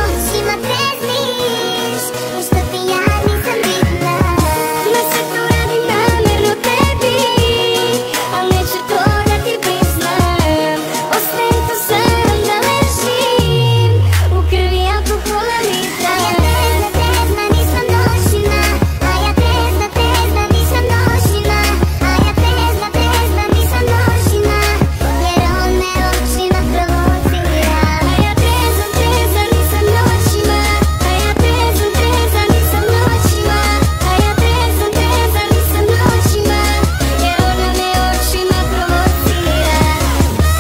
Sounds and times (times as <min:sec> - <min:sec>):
Electronic music: 0:00.0 - 0:40.6.